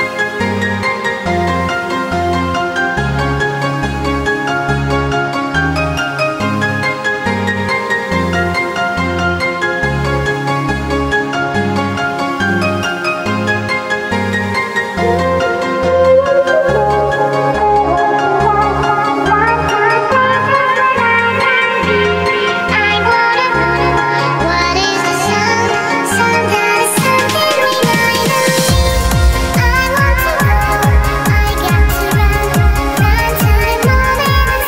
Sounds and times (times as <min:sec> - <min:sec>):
Music: 0:00.0 - 0:34.6.